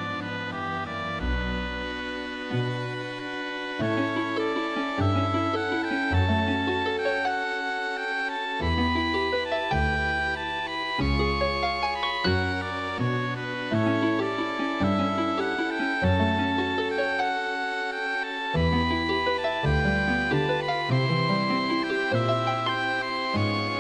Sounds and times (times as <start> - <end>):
Music: 0.0 - 23.8.